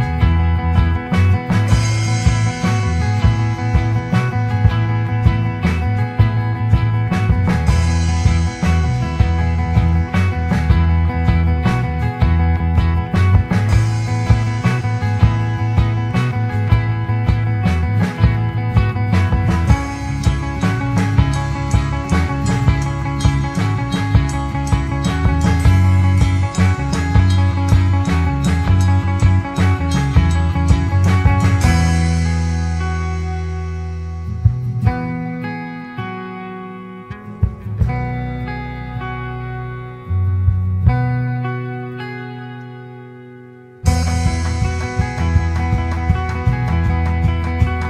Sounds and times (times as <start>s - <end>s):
Music: 0.0s - 47.8s.